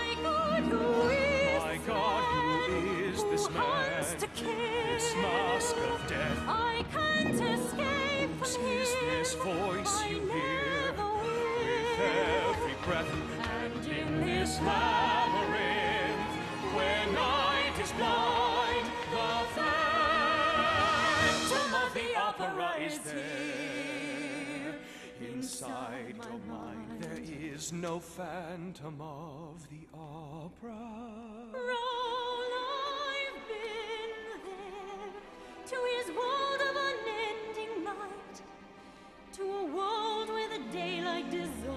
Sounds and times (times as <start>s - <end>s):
Opera: 0.0s - 41.7s.